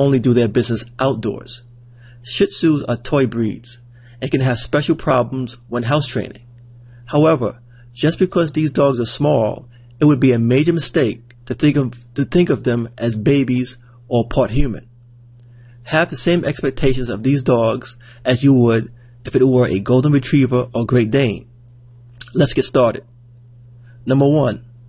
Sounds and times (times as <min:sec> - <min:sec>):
Speech: 0:00.0 - 0:06.5, 0:07.1 - 0:14.9, 0:15.9 - 0:21.6, 0:22.2 - 0:23.1, 0:24.0 - 0:24.7.